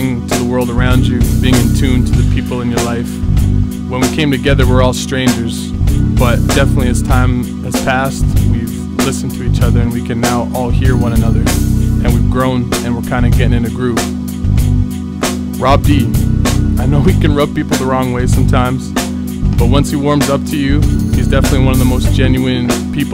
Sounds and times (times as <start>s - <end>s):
Speech: 0.0s - 3.2s, 3.9s - 14.1s, 15.6s - 16.1s, 16.8s - 19.0s, 19.6s - 23.1s
Music: 0.0s - 23.1s.